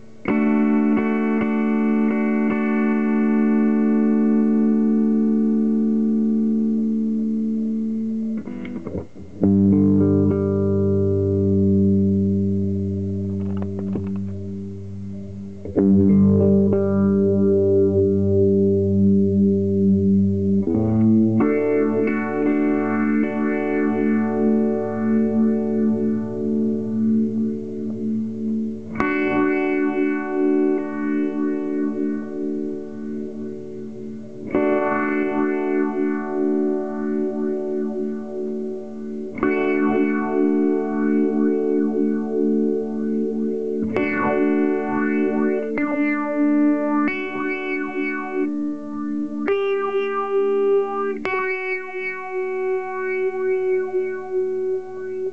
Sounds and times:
Effects unit: 0:00.0 - 0:55.3
Guitar: 0:00.0 - 0:55.3.

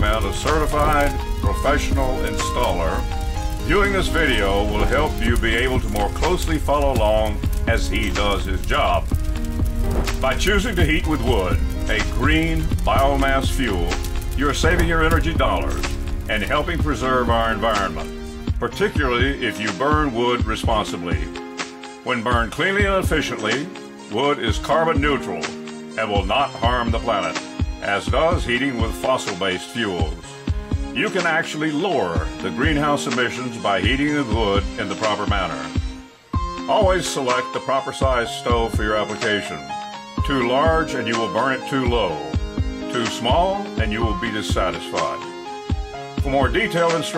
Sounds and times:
Speech: 0:00.0 - 0:03.0, 0:03.6 - 0:09.1, 0:10.2 - 0:21.3, 0:22.1 - 0:30.2, 0:31.0 - 0:35.8, 0:36.7 - 0:45.4, 0:46.2 - 0:47.1
Music: 0:00.0 - 0:47.1.

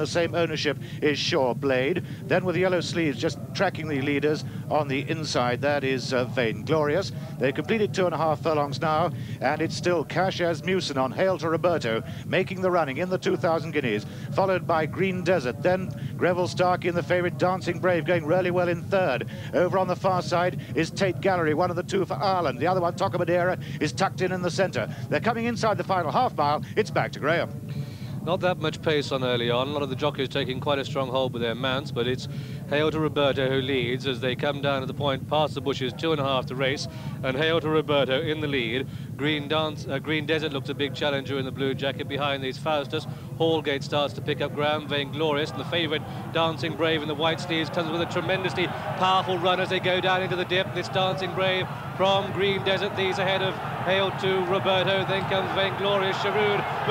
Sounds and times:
Speech: 0:00.0 - 0:56.9.

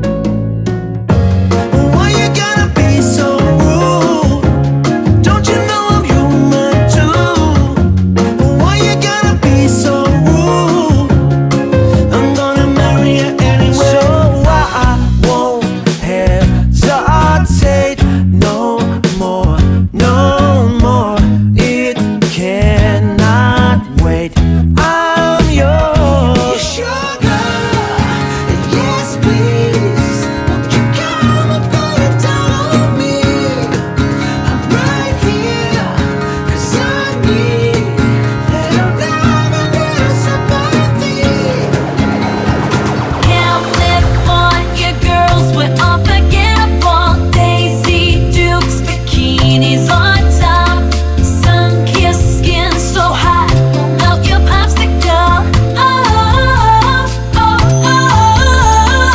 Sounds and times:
Music: 0:00.0 - 0:59.1.

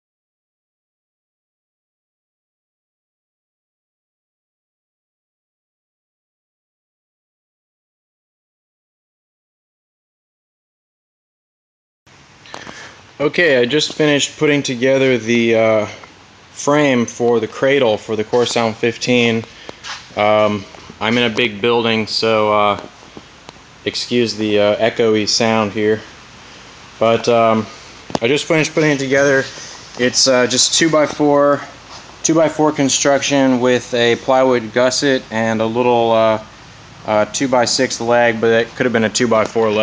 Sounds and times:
Speech: 0:13.2 - 0:16.0, 0:16.6 - 0:19.5, 0:20.2 - 0:22.9, 0:23.9 - 0:26.1, 0:27.0 - 0:36.5, 0:37.1 - 0:39.8.

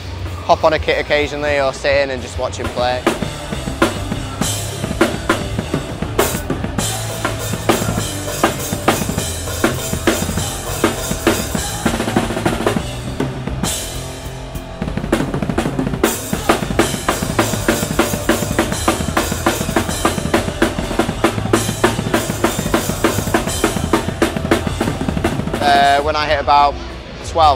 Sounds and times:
Music: 0:00.0 - 0:27.5.

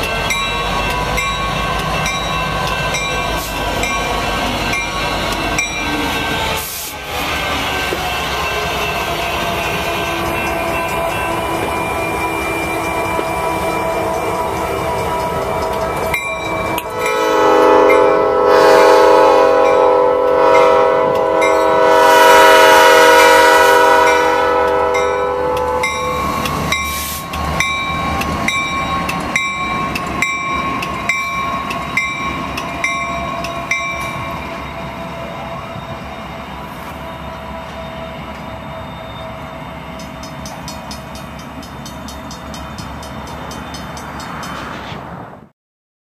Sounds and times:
Railroad car, train wagon: 0:00.0 - 0:45.5
Train horn: 0:06.4 - 0:16.0, 0:16.6 - 0:27.3.

